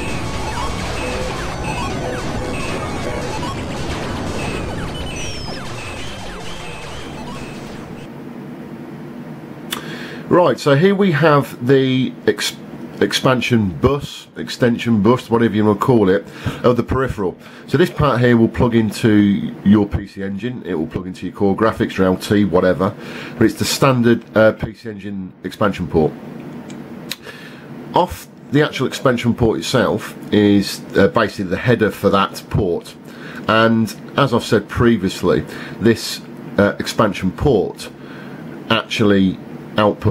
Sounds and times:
Speech: 0:10.3 - 0:26.2, 0:27.9 - 0:38.0, 0:38.7 - 0:40.1.

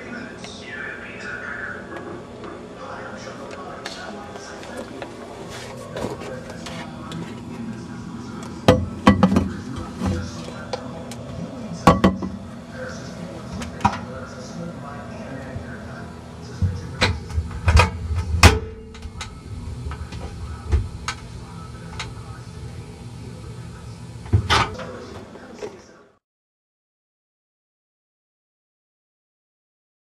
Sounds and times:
Speech: 0:00.0 - 0:17.8, 0:19.1 - 0:26.2.

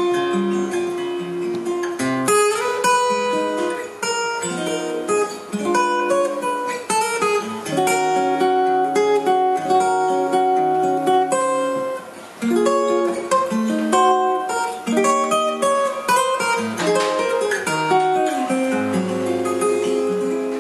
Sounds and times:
Strum: 0:00.0 - 0:20.6.

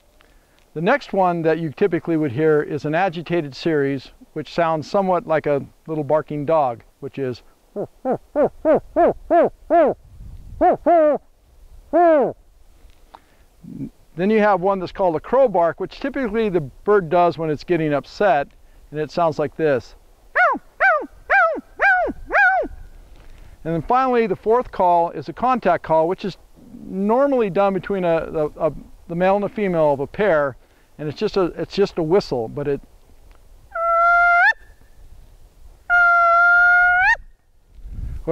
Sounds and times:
Speech: 0:00.8 - 0:07.4, 0:13.7 - 0:20.0, 0:23.6 - 0:32.8.

